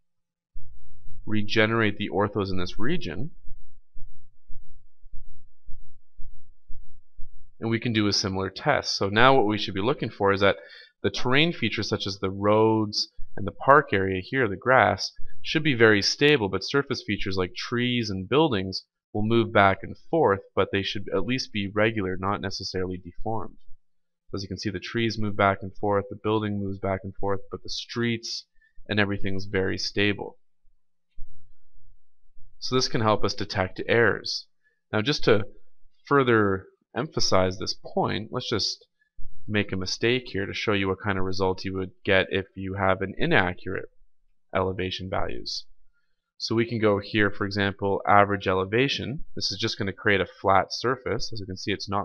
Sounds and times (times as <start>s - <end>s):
Speech: 1.3s - 3.3s, 7.6s - 23.6s, 24.4s - 30.4s, 32.6s - 35.5s, 36.1s - 38.8s, 39.5s - 43.9s, 44.6s - 45.7s, 46.4s - 52.0s.